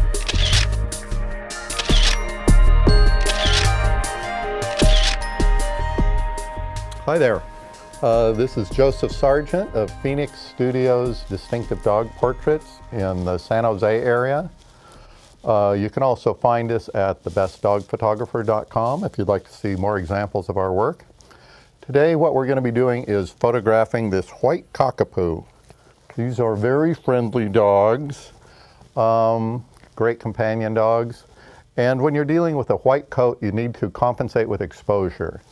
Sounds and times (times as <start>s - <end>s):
Music: 0.0s - 15.1s
Speech: 7.0s - 7.4s, 8.0s - 14.6s, 15.4s - 21.1s, 21.8s - 25.5s, 26.1s - 28.4s, 29.0s - 35.5s.